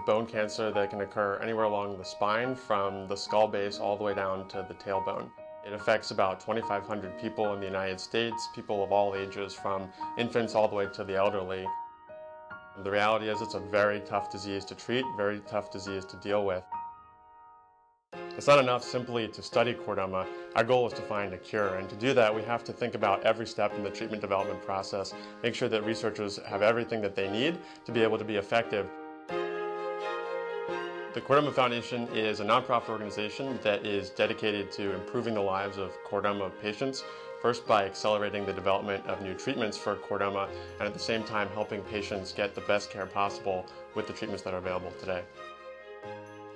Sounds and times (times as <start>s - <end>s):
Speech: 0.0s - 11.7s, 12.8s - 16.6s, 18.4s - 28.9s, 31.2s - 45.3s
Music: 0.0s - 46.5s.